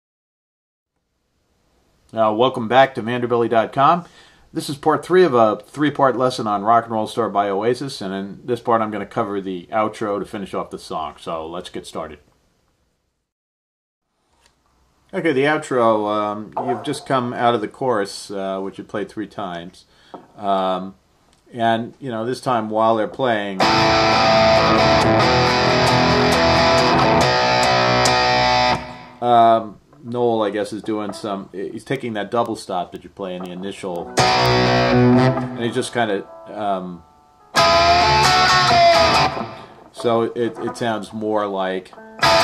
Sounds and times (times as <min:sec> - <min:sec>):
Speech: 0:02.1 - 0:12.3, 0:15.1 - 0:23.6, 0:29.2 - 0:34.1, 0:35.6 - 0:37.0, 0:40.0 - 0:42.0
Guitar: 0:16.4 - 0:17.6, 0:22.4 - 0:42.4.